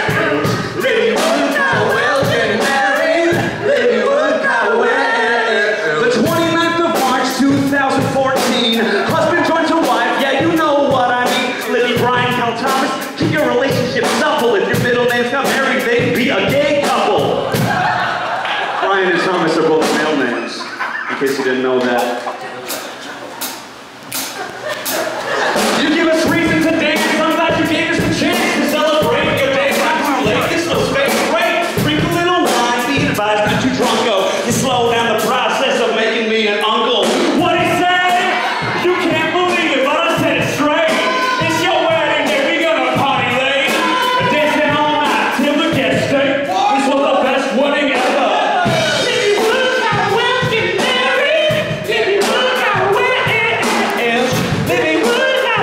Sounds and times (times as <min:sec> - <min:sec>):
Music: 0:00.0 - 0:55.6.